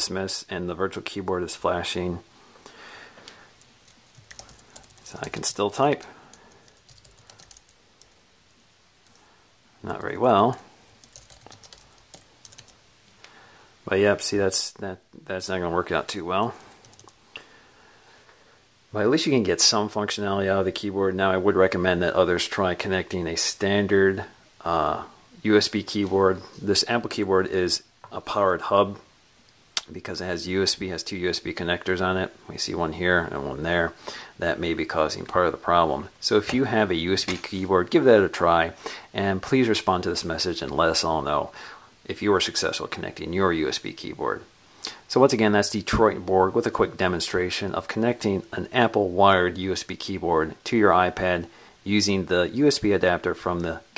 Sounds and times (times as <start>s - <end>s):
Speech: 0.0s - 2.3s, 5.0s - 6.2s, 9.8s - 10.7s, 13.8s - 16.7s, 18.9s - 29.1s, 29.8s - 53.9s
Computer keyboard: 3.8s - 5.4s, 6.3s - 8.2s, 11.0s - 12.8s, 16.8s - 17.2s.